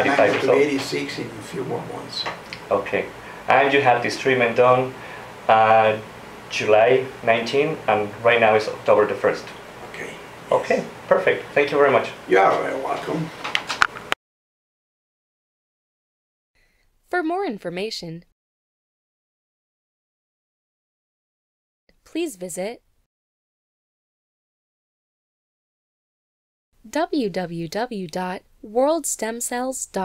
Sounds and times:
Speech: 0.0s - 13.4s, 17.1s - 18.3s, 22.1s - 22.8s, 26.9s - 30.0s.

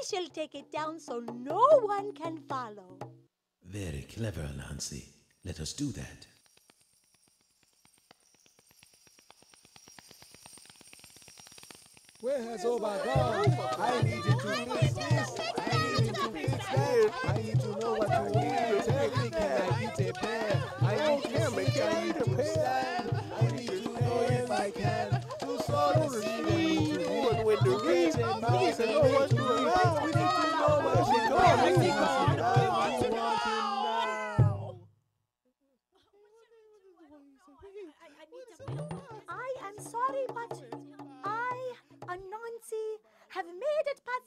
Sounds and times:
Speech: 3.7s - 6.3s.

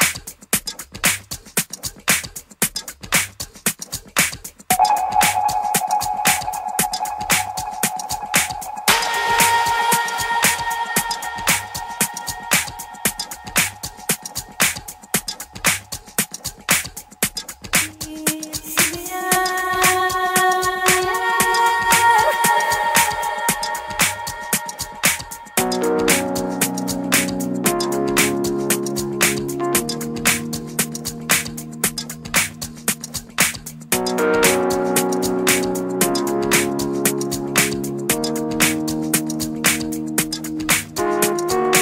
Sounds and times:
House music: 4.7s - 41.8s.

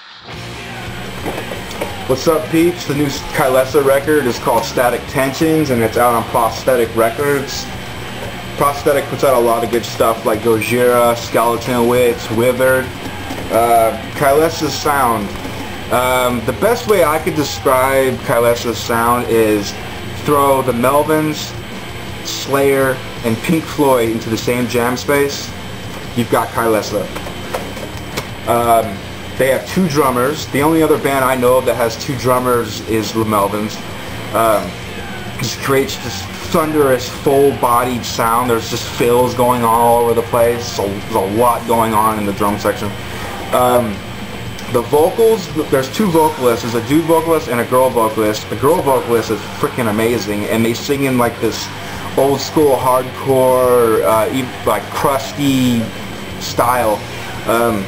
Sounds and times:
Music: 0.0s - 57.8s
Speech: 1.7s - 7.8s, 8.4s - 27.2s, 28.5s - 57.8s.

